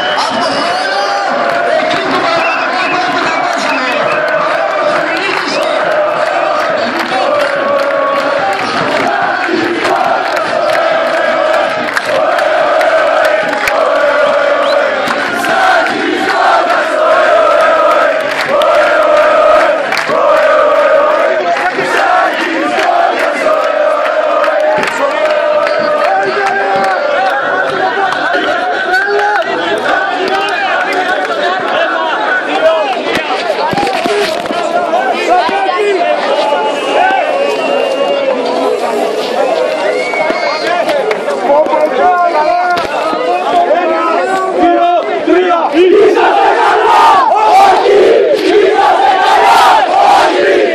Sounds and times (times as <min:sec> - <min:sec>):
Speech: 0:00.0 - 0:09.3, 0:25.0 - 0:47.8
Crowd: 0:00.0 - 0:50.7.